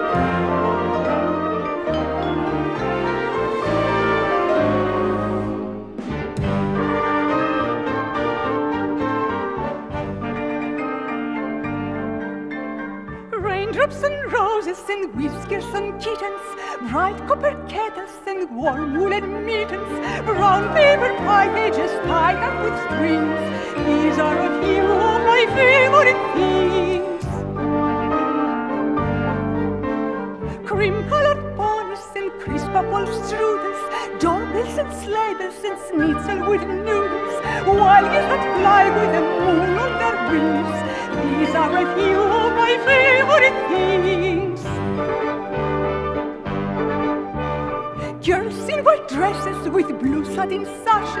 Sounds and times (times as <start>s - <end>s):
Tender music: 0.0s - 51.2s.